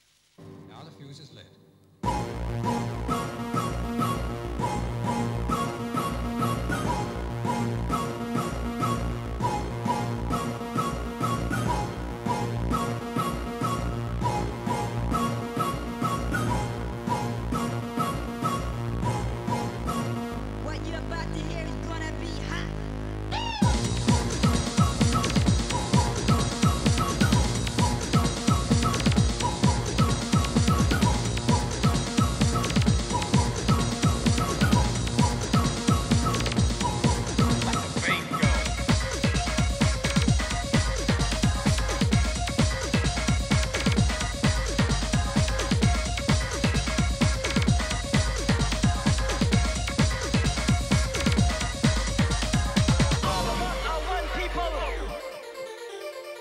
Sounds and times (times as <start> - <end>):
Music: 0.2 - 56.4.